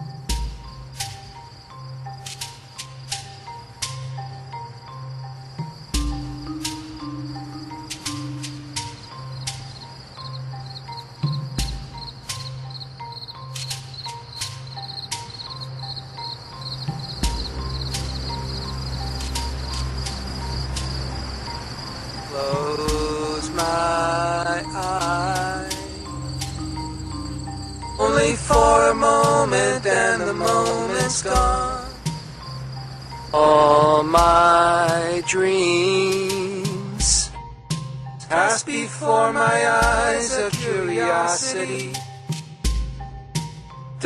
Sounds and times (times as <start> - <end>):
Rustling leaves: 0.0 - 37.4
Music: 0.0 - 44.0.